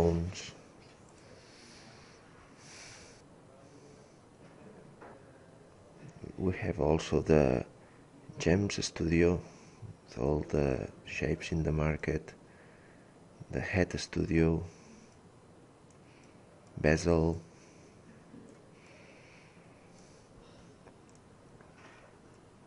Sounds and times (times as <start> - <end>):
Speech: 0.0 - 0.6, 3.5 - 9.5, 10.1 - 12.4, 13.4 - 14.8, 16.8 - 17.5.